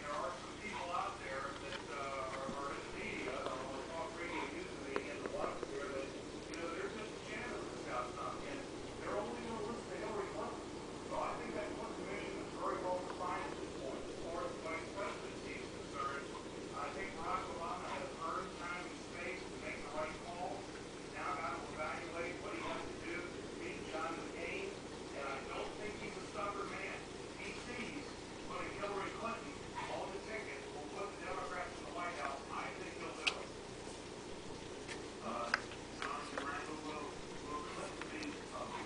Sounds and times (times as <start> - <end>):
Speech: 0.0 - 33.6, 35.2 - 38.8.